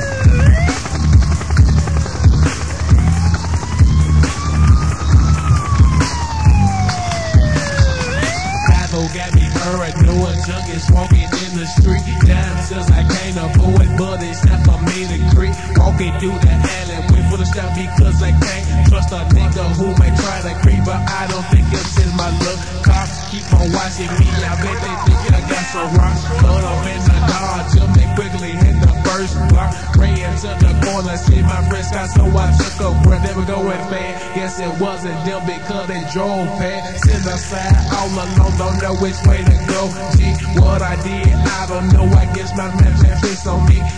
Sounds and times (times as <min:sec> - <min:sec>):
Music: 0:00.0 - 0:43.9.